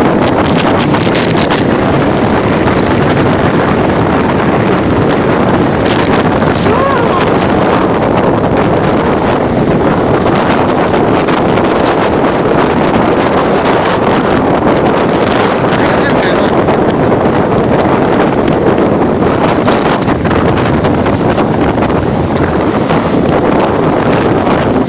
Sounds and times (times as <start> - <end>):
Wind noise (microphone): 0.0 - 24.8
Speech: 6.6 - 7.3, 15.8 - 16.6.